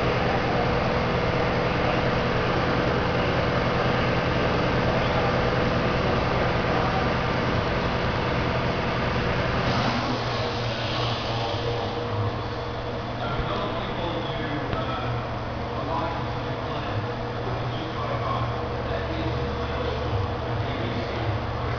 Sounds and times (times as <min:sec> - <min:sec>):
Vehicle: 0:00.0 - 0:21.7
Speech: 0:13.2 - 0:21.7.